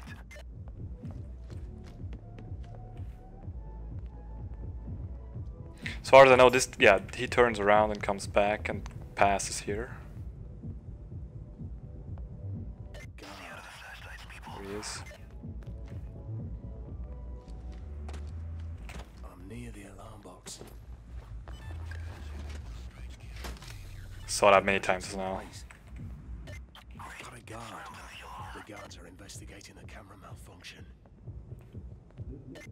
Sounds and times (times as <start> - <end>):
Music: 0.0 - 32.7
Speech: 6.0 - 10.0, 14.4 - 15.1, 19.2 - 20.7, 24.3 - 25.6, 27.0 - 30.9.